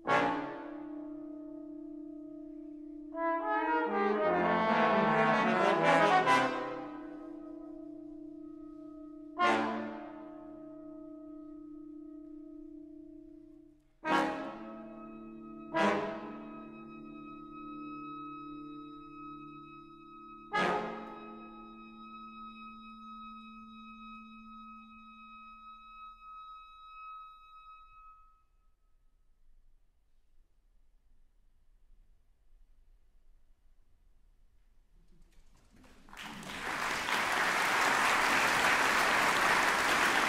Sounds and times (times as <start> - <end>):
Brass instrument: 0.0 - 11.8, 13.9 - 28.1, 35.9 - 40.2.